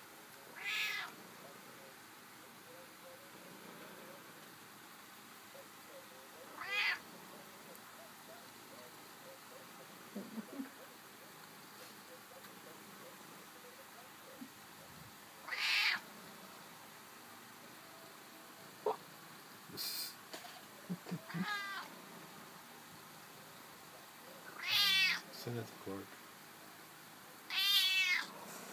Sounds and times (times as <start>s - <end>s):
Meow: 0.6s - 1.1s, 6.6s - 7.0s, 15.4s - 16.0s, 21.3s - 21.9s, 24.6s - 25.2s, 27.5s - 28.3s.